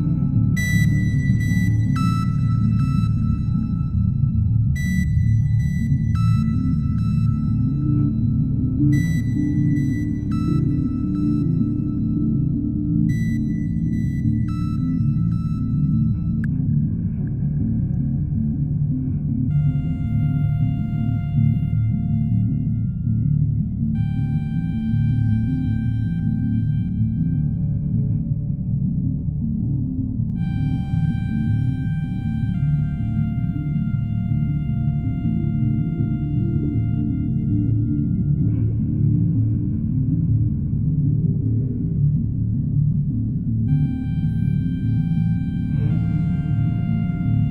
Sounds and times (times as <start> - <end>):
Ambient music: 0.0 - 47.5.